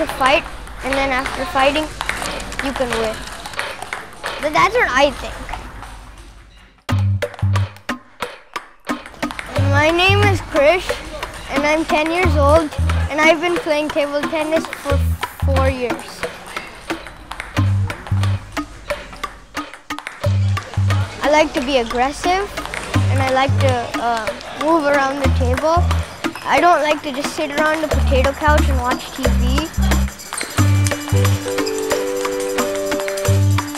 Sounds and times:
Speech: 0.0 - 3.3, 4.4 - 5.5, 9.5 - 16.8, 20.8 - 30.1
Music: 6.9 - 33.7.

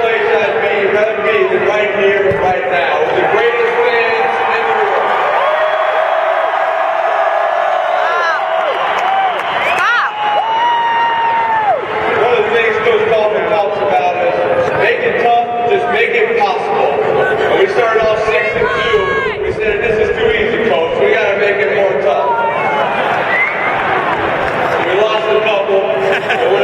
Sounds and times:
Male speech, man speaking: 0.0 - 5.1, 12.2 - 22.5, 24.8 - 26.6.

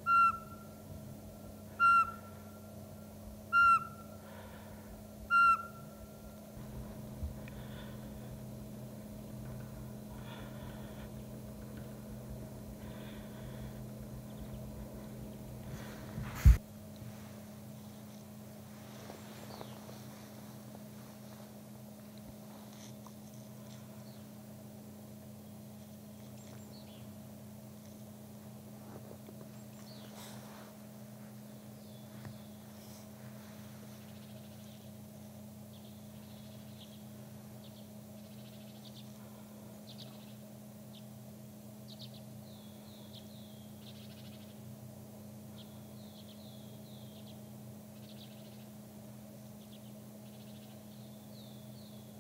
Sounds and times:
Bird: 0.0 - 0.8, 1.7 - 2.7, 3.5 - 4.6, 5.3 - 6.2, 19.3 - 20.1, 29.4 - 30.6, 35.7 - 41.1, 41.8 - 44.7, 45.5 - 48.8, 49.5 - 52.2.

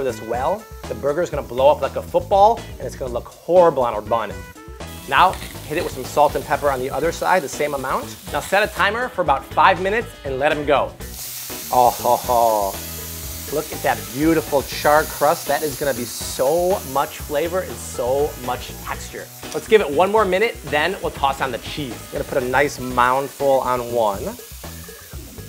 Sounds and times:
Sizzle: 0.0 - 25.4.

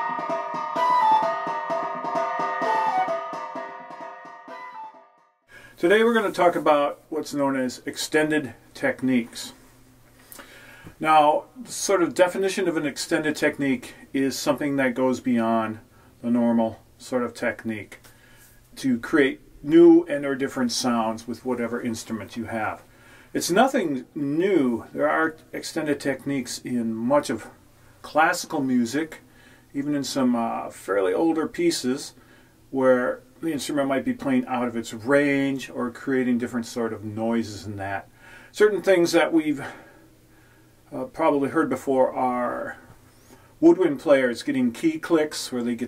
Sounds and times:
Speech: 5.8 - 9.6, 11.0 - 18.0, 18.8 - 39.9, 40.9 - 42.9, 43.6 - 45.8.

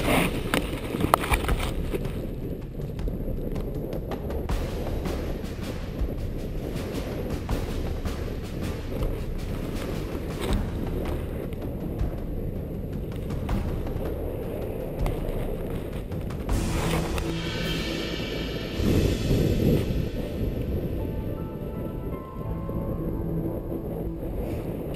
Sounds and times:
Music: 0.0 - 24.9
Outside, rural or natural: 0.0 - 24.9.

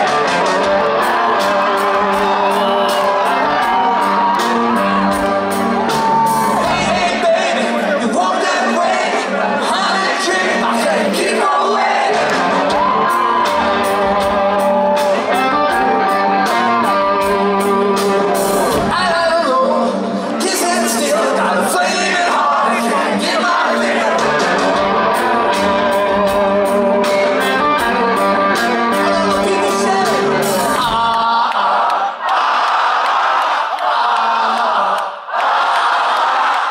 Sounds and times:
Music: 0.0 - 31.6.

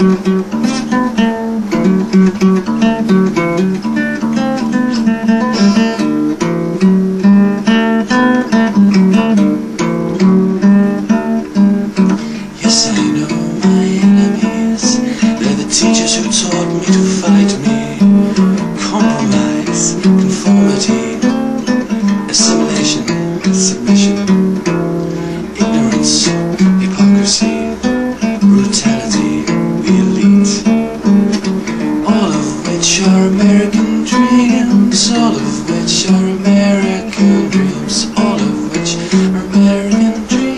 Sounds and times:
Guitar: 0.0 - 40.5
Singing: 12.4 - 24.3, 25.4 - 27.8, 28.4 - 30.9, 32.0 - 40.5.

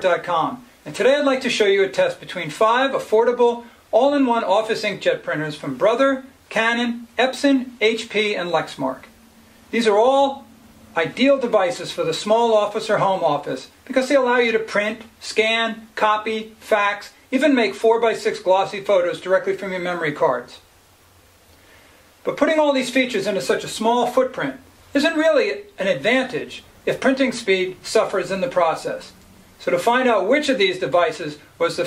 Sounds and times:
Speech: 0.0 - 20.7, 22.2 - 31.8.

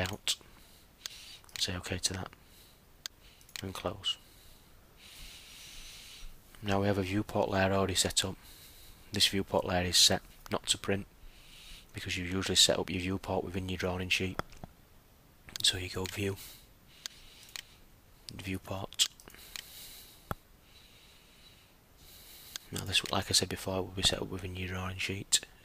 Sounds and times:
Speech: 1.6 - 2.4, 3.6 - 4.2, 6.6 - 8.4, 9.2 - 11.1, 12.0 - 14.4, 15.6 - 16.4, 18.3 - 19.1, 22.7 - 25.5.

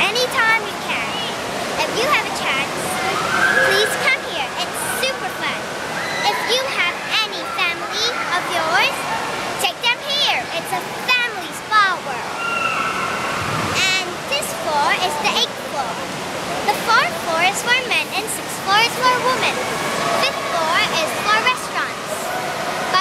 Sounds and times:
Speech: 0.0 - 12.2, 13.8 - 16.0, 16.7 - 19.6, 20.2 - 22.4.

